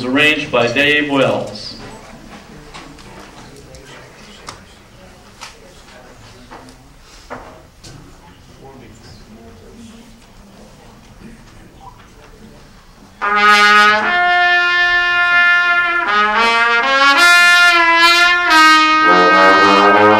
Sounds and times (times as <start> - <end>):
Speech: 0.0 - 7.0, 7.8 - 12.8.